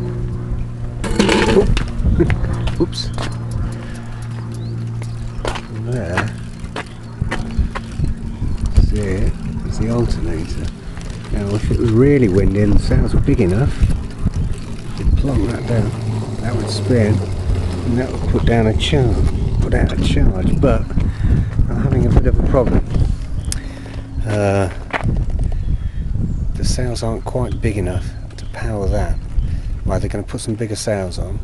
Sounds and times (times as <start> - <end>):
Speech: 1.5 - 3.2, 5.7 - 6.4, 8.8 - 10.7, 11.3 - 13.8, 15.0 - 20.9, 21.7 - 22.8, 24.2 - 24.8, 26.6 - 29.2, 29.9 - 31.4.